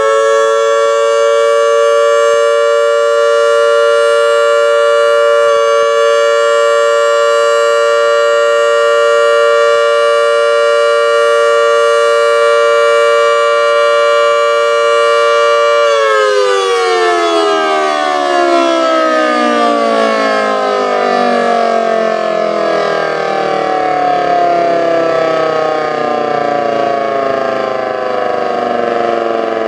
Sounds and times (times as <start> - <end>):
Civil defense siren: 0.0 - 29.6.